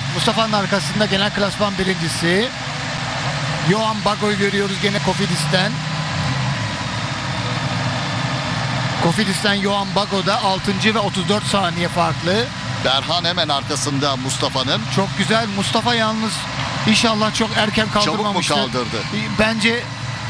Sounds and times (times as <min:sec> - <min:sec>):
Speech: 0:00.0 - 0:02.6, 0:03.6 - 0:05.8, 0:09.0 - 0:19.9.